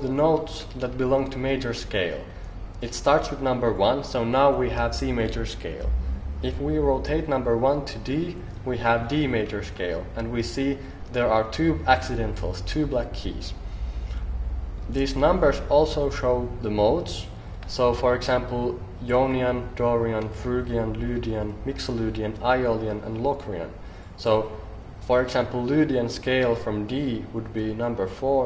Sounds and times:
Speech: 0.0s - 13.6s, 14.9s - 28.4s.

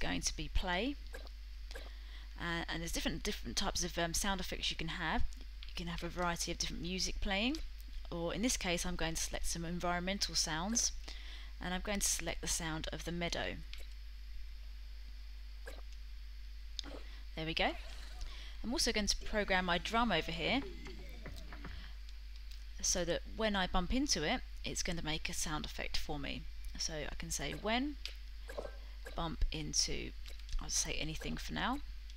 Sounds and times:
Speech: 0.0s - 1.0s, 2.4s - 11.0s, 11.6s - 13.6s, 17.4s - 17.8s, 18.6s - 21.7s, 22.8s - 28.0s, 29.2s - 31.8s.

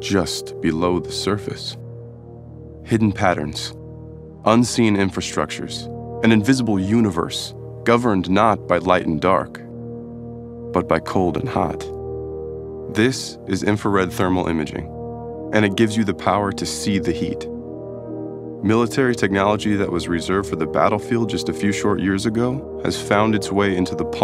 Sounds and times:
Speech: 0.0s - 1.8s, 2.9s - 3.8s, 4.5s - 9.6s, 10.8s - 11.9s, 12.9s - 14.9s, 15.5s - 17.5s, 18.6s - 24.2s
Music: 0.0s - 24.2s.

